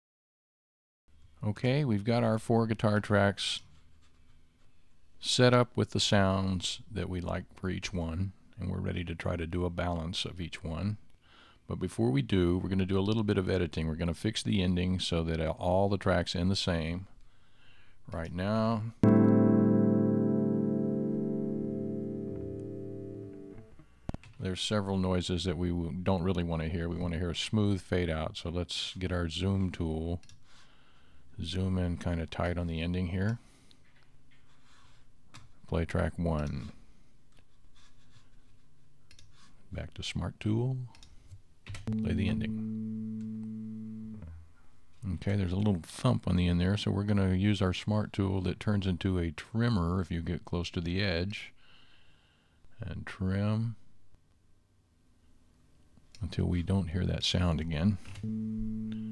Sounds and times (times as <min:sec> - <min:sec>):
Speech: 0:01.4 - 0:03.7, 0:05.2 - 0:11.0, 0:11.7 - 0:17.2, 0:18.1 - 0:19.0, 0:24.4 - 0:30.2, 0:31.4 - 0:33.4, 0:35.6 - 0:36.8, 0:39.7 - 0:41.0, 0:41.9 - 0:42.6, 0:45.0 - 0:51.6, 0:52.8 - 0:53.8, 0:56.2 - 0:58.1
Music: 0:19.0 - 0:23.8.